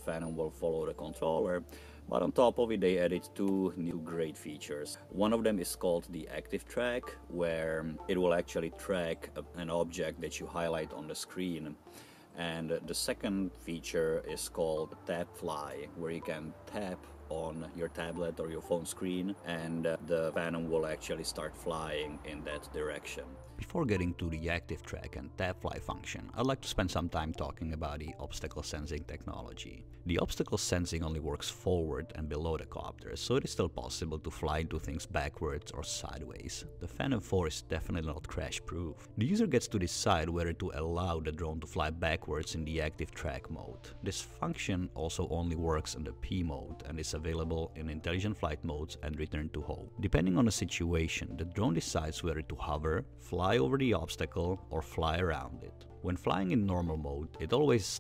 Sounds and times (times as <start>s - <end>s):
Speech: 0.0s - 11.8s, 12.4s - 58.0s.